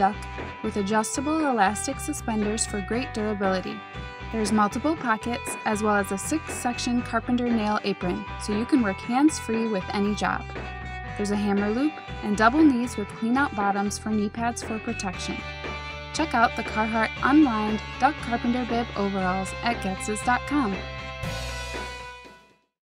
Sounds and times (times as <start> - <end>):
Speech: 0.0 - 3.8, 4.4 - 10.4, 11.2 - 15.4, 16.2 - 20.8
Music: 0.0 - 22.8.